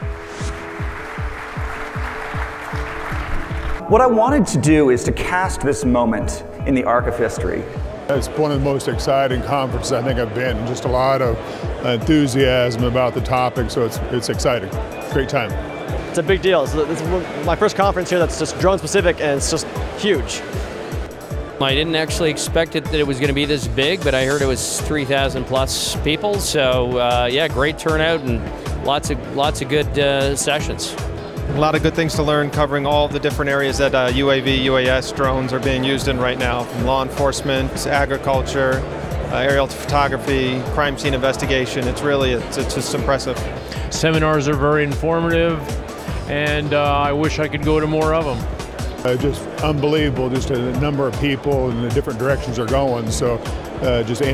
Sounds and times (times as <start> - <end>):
Music: 0.0 - 54.3
Speech: 3.8 - 15.6, 16.2 - 20.4, 21.6 - 45.7, 46.3 - 48.4, 49.0 - 54.3.